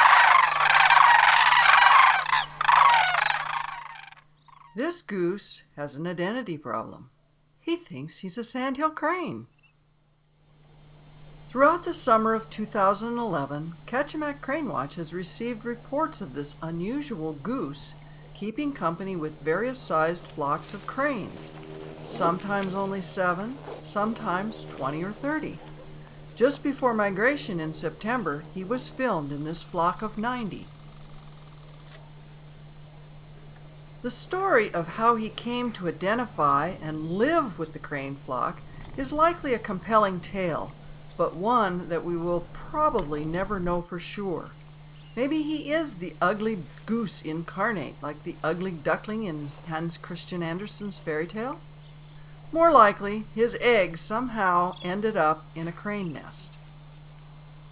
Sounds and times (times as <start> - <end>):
Speech: 4.8 - 9.5, 11.5 - 25.7, 26.4 - 30.7, 34.0 - 44.6, 45.2 - 51.6, 52.6 - 56.6.